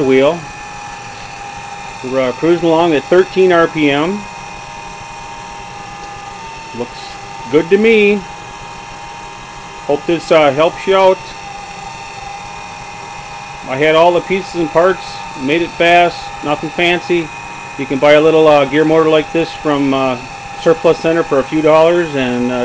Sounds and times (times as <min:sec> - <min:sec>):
Speech: 0:00.0 - 0:00.5, 0:02.0 - 0:04.3, 0:06.8 - 0:08.3, 0:09.8 - 0:11.4, 0:13.7 - 0:22.6.